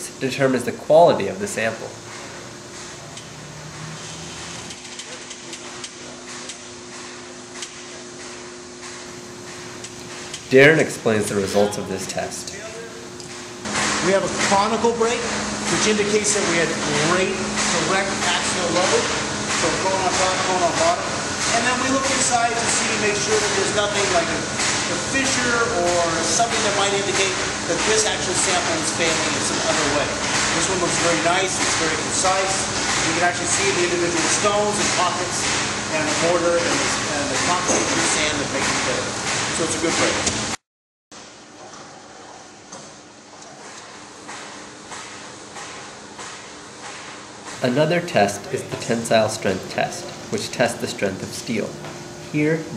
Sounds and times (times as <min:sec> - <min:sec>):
Speech: 0:00.0 - 0:02.0, 0:10.5 - 0:13.0, 0:14.0 - 0:40.3, 0:47.6 - 0:52.7
Inside, large room or hall: 0:00.0 - 0:40.4, 0:41.2 - 0:52.7.